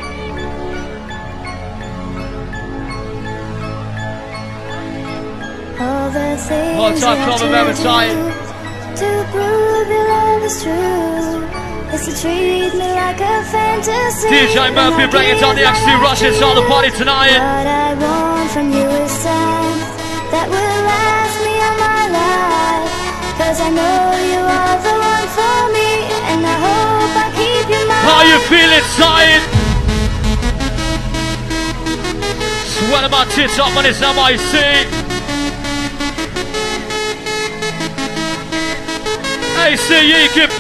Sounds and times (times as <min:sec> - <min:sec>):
Music: 0:00.0 - 0:40.6.